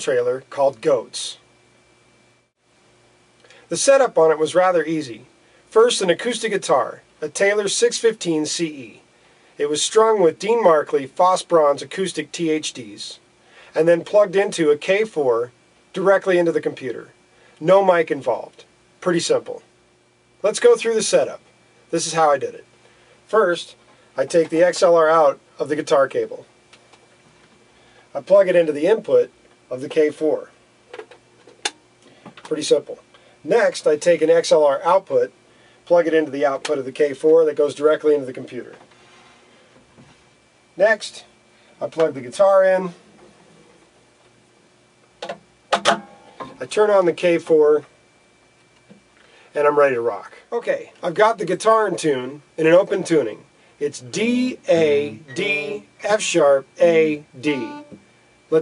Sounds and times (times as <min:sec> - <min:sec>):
Speech: 0:00.0 - 0:01.5, 0:03.7 - 0:09.0, 0:09.6 - 0:13.2, 0:13.8 - 0:19.7, 0:20.4 - 0:22.7, 0:23.3 - 0:26.5, 0:28.1 - 0:30.6, 0:32.4 - 0:38.8, 0:40.8 - 0:43.0, 0:46.6 - 0:47.9, 0:49.5 - 0:57.8.